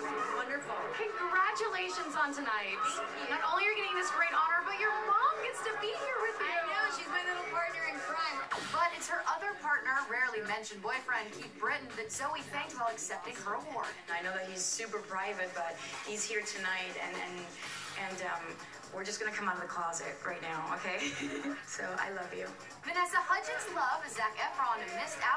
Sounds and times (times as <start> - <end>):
Music: 0.0 - 25.3
Speech: 0.0 - 25.3.